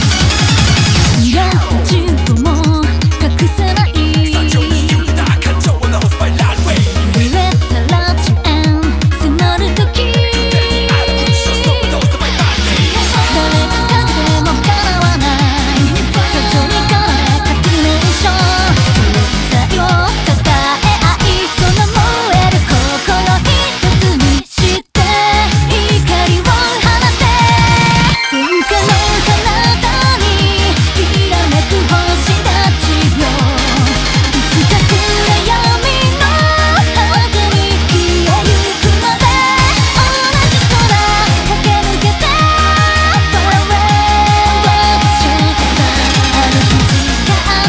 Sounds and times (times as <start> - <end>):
Music: 0.0 - 47.6.